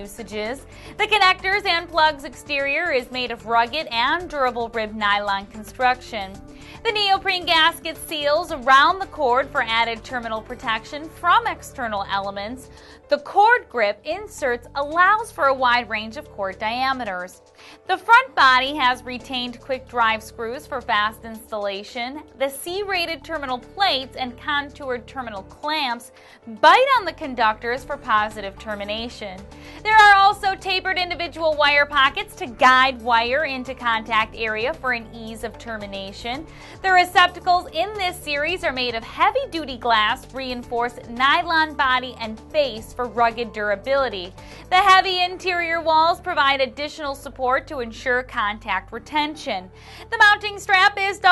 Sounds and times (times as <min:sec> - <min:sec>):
Music: 0:00.0 - 0:51.3
Speech: 0:00.0 - 0:51.3.